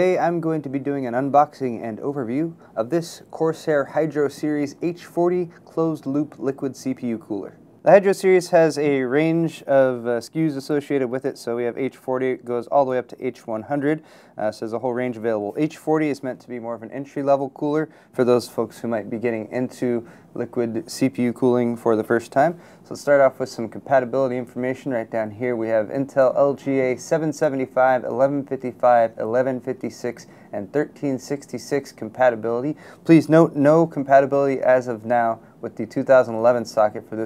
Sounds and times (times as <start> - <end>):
Speech: 0.0 - 37.2.